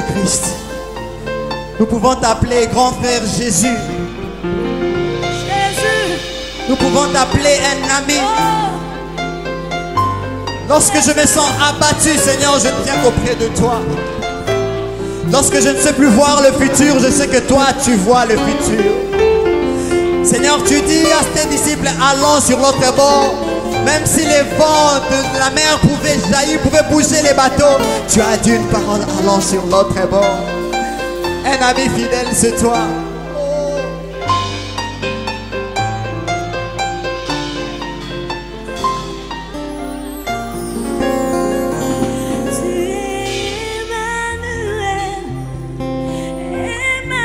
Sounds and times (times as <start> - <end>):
Music: 0.0 - 47.2.